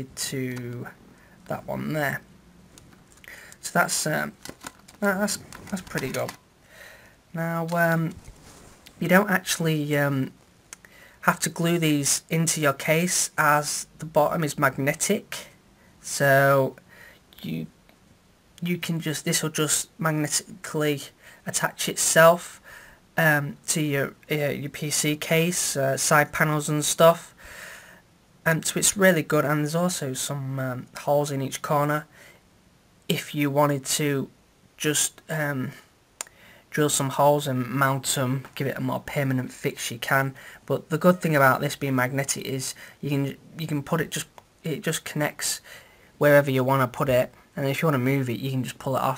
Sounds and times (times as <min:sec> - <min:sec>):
Speech: 0:00.0 - 0:02.3, 0:03.6 - 0:04.4, 0:05.0 - 0:06.4, 0:07.4 - 0:08.2, 0:09.0 - 0:10.4, 0:11.2 - 0:17.8, 0:18.6 - 0:22.6, 0:23.2 - 0:27.3, 0:28.4 - 0:32.1, 0:33.1 - 0:35.9, 0:36.7 - 0:45.6, 0:46.2 - 0:49.1.